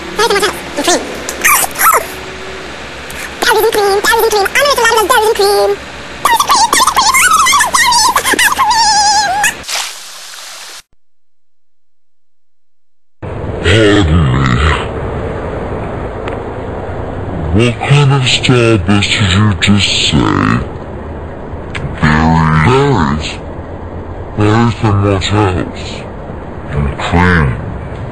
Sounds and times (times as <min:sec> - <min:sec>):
Speech: 0:00.2 - 0:02.0, 0:03.4 - 0:09.5, 0:13.6 - 0:14.9, 0:17.5 - 0:20.7, 0:21.8 - 0:23.4, 0:24.4 - 0:26.1, 0:26.7 - 0:27.6.